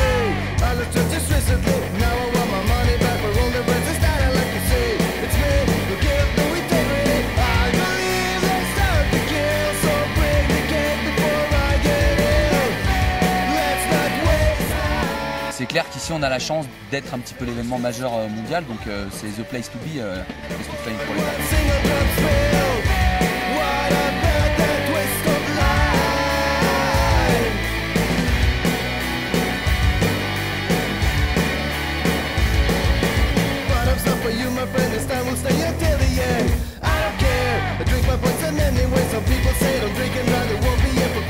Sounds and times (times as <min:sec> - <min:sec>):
Music: 0:00.0 - 0:41.2
Speech: 0:15.5 - 0:22.6.